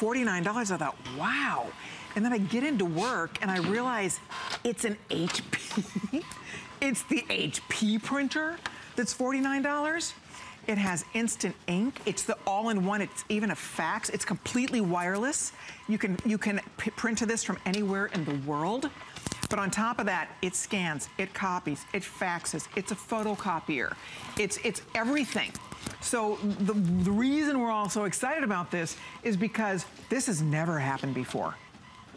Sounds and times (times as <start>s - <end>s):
Speech: 0.0s - 5.8s, 6.8s - 18.9s, 19.5s - 31.6s
Printer: 0.0s - 32.1s.